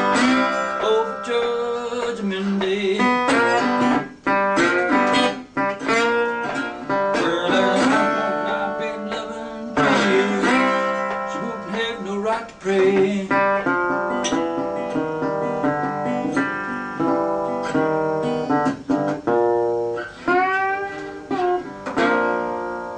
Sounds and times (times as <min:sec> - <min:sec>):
Steel guitar, slide guitar: 0:00.0 - 0:22.9
Strum: 0:00.0 - 0:22.9.